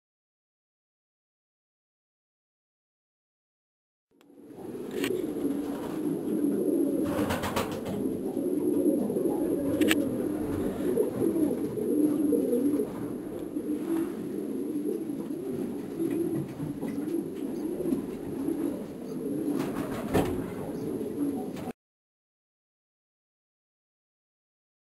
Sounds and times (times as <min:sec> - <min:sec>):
Coo: 0:04.3 - 0:21.8.